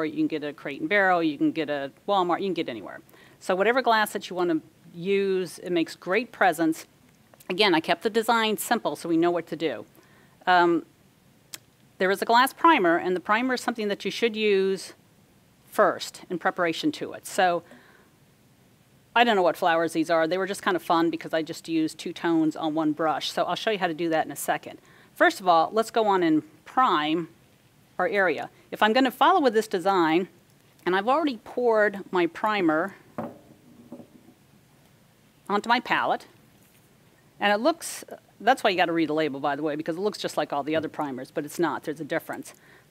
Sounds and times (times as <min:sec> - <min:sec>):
Speech: 0:00.0 - 0:10.9, 0:12.0 - 0:15.0, 0:15.7 - 0:17.6, 0:19.2 - 0:27.3, 0:28.0 - 0:33.0, 0:35.5 - 0:36.3, 0:37.4 - 0:42.6.